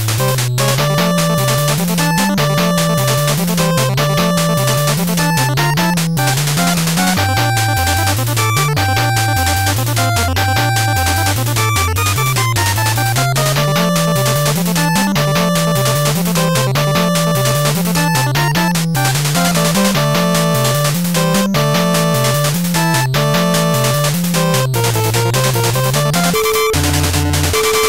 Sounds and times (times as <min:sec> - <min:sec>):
Music: 0:00.0 - 0:27.8.